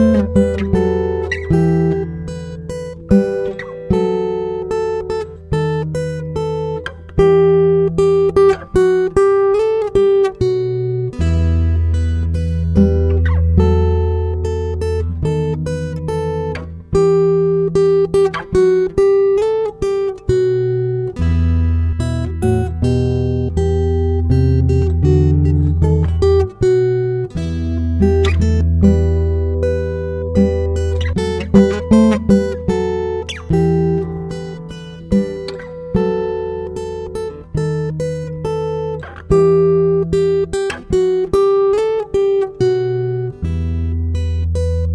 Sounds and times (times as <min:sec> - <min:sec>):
Acoustic guitar: 0:00.0 - 0:44.9
Strum: 0:00.0 - 0:44.9.